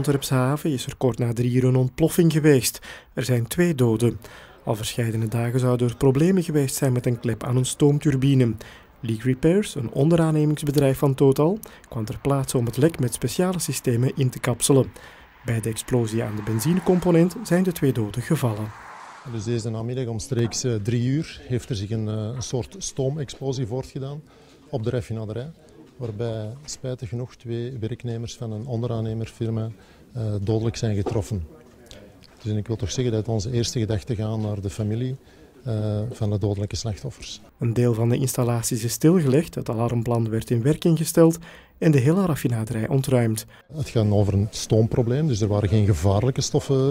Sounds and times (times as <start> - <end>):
Speech: 0.0 - 46.9.